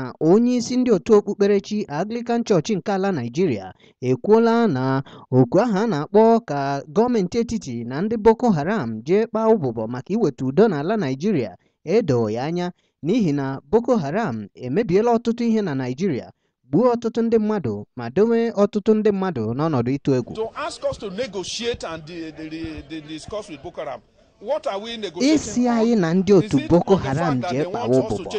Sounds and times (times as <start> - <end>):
Speech: 0.0 - 28.3.